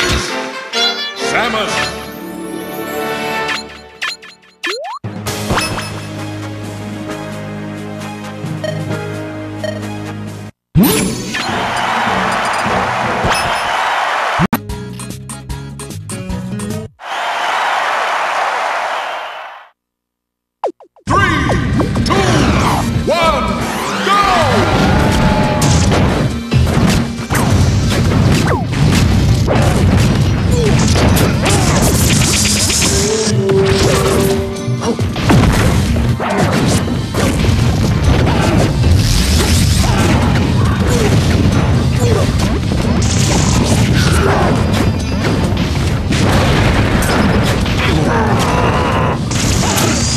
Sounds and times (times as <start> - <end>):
Music: 0.0 - 13.8, 14.5 - 17.0, 21.1 - 50.1
Smash, crash: 24.7 - 50.1.